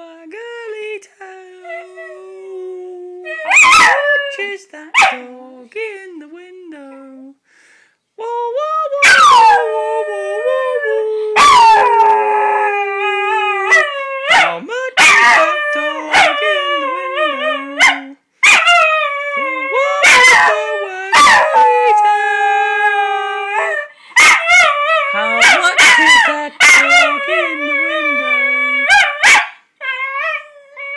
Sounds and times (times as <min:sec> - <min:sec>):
Speech: 0:00.0 - 0:03.5, 0:04.1 - 0:07.4, 0:08.2 - 0:13.7, 0:14.4 - 0:18.2, 0:19.4 - 0:23.7, 0:25.1 - 0:28.9.